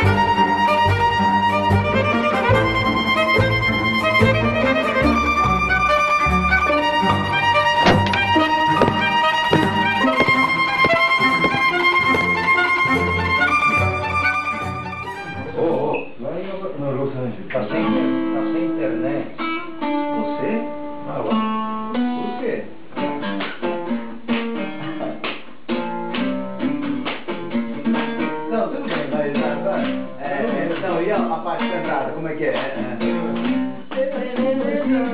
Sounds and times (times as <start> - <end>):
Music: 0.0 - 16.2, 17.7 - 35.1
Speech: 15.4 - 19.4, 20.1 - 21.5, 22.2 - 22.8, 24.8 - 25.2, 28.4 - 35.1.